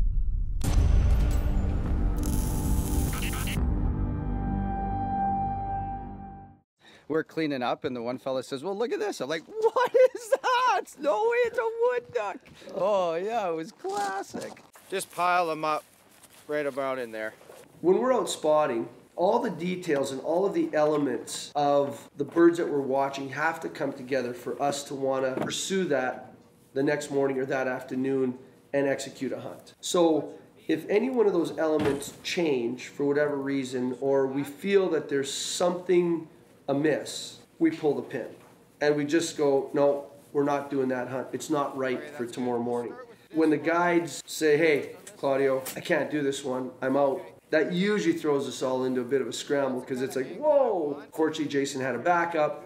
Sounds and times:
Music: 0:00.2 - 0:06.6
Speech: 0:07.1 - 0:09.8, 0:16.5 - 0:52.6.

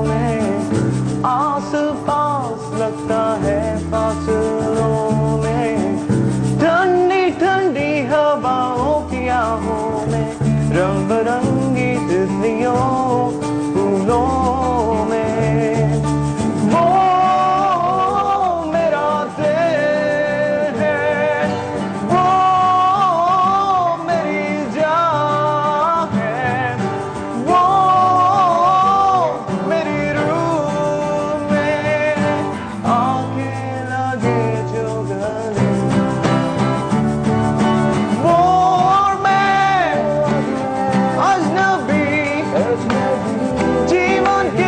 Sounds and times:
Blues: 0:00.0 - 0:44.6
Guitar: 0:00.0 - 0:44.6.

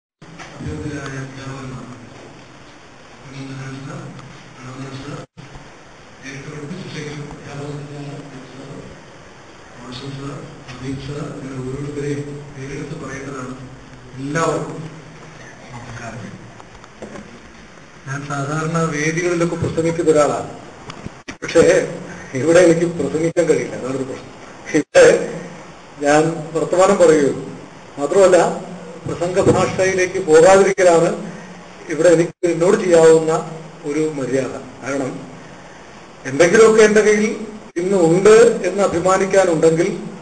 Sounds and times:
Narration, monologue: 0:00.2 - 0:40.2
Male speech, man speaking: 0:00.6 - 0:02.1, 0:03.3 - 0:05.3, 0:06.2 - 0:09.0, 0:09.8 - 0:14.9, 0:15.6 - 0:16.4, 0:18.1 - 0:20.6, 0:21.4 - 0:31.3, 0:31.9 - 0:35.3, 0:36.3 - 0:40.2.

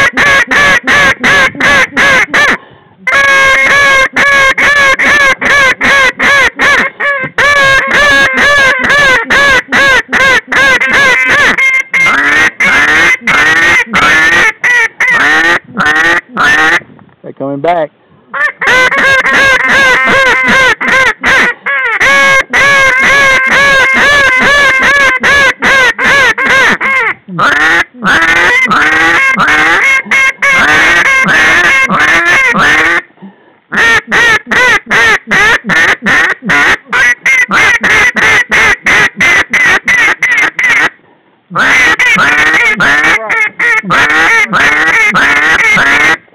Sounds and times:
Quack: 0:00.0 - 0:16.8, 0:18.4 - 0:33.1, 0:33.7 - 0:41.0, 0:41.6 - 0:46.2
Speech: 0:17.2 - 0:17.9, 0:43.0 - 0:43.5.

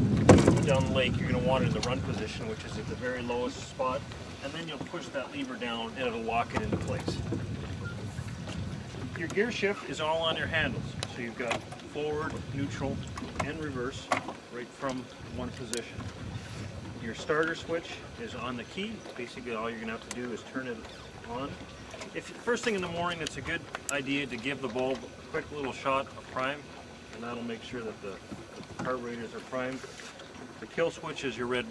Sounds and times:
Speech: 0:00.5 - 0:07.3, 0:09.2 - 0:16.0, 0:17.0 - 0:21.6, 0:22.2 - 0:28.2, 0:28.8 - 0:29.8, 0:30.6 - 0:31.7.

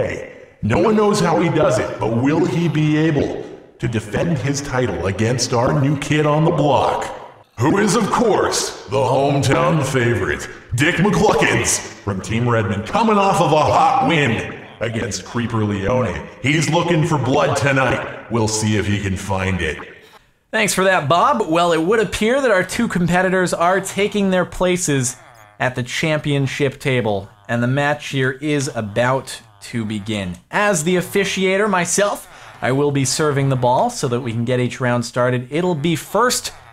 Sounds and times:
Speech: 0:00.0 - 0:36.6.

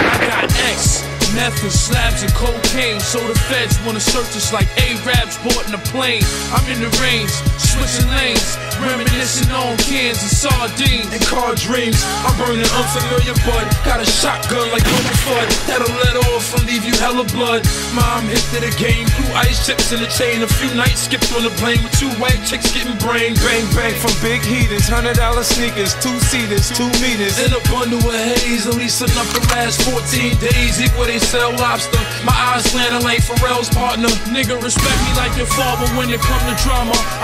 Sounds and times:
Artillery fire: 0:00.0 - 0:01.3, 0:14.8 - 0:16.0, 0:34.8 - 0:35.6
Music: 0:00.0 - 0:37.2.

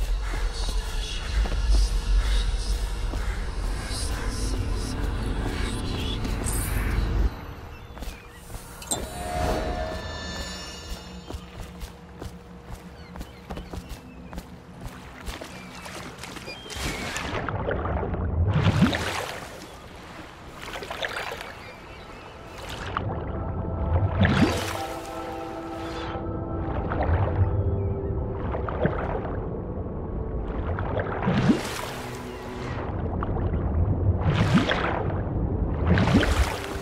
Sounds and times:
Music: 0:00.0 - 0:13.3, 0:22.5 - 0:36.8.

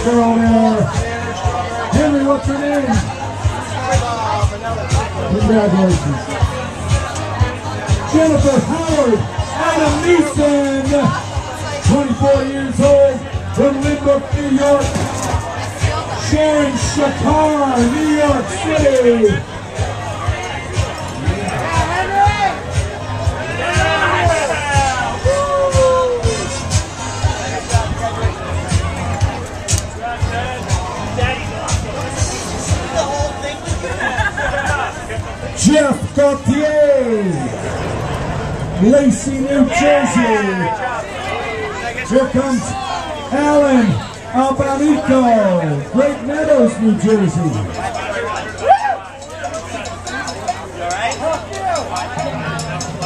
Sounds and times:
Speech: 0:00.0 - 0:25.2, 0:34.6 - 0:37.6, 0:38.8 - 0:53.0
Hubbub, speech noise, speech babble: 0:00.0 - 0:53.0
Music: 0:00.0 - 0:53.0
Outside, urban or manmade: 0:00.0 - 0:53.0.

